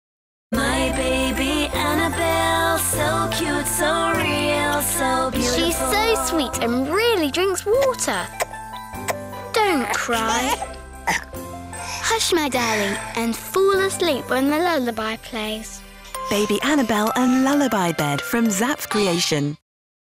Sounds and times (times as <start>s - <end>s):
Music: 0.5s - 19.6s
Child speech, kid speaking: 5.6s - 8.3s, 9.5s - 10.6s, 12.0s - 15.8s.